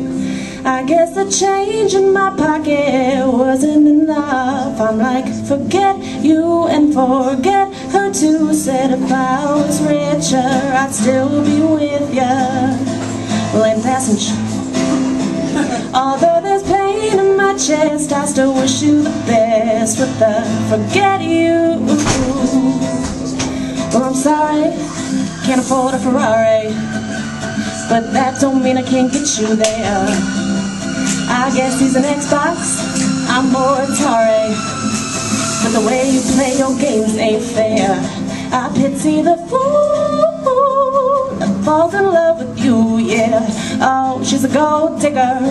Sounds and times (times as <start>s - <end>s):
Music: 0.0s - 45.5s
Female singing: 0.7s - 14.5s, 15.9s - 23.2s, 23.9s - 26.9s, 27.8s - 30.3s, 31.2s - 34.7s, 35.6s - 45.5s.